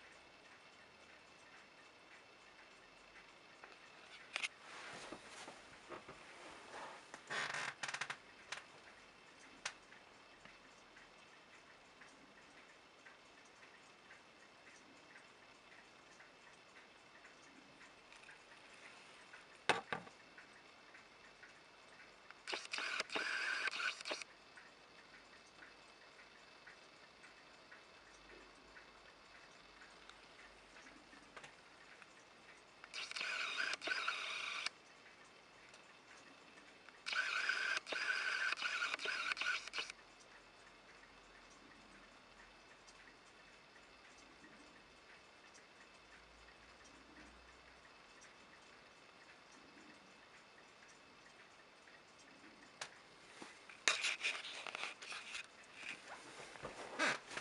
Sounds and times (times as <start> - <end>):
Tick-tock: 19.2 - 53.0.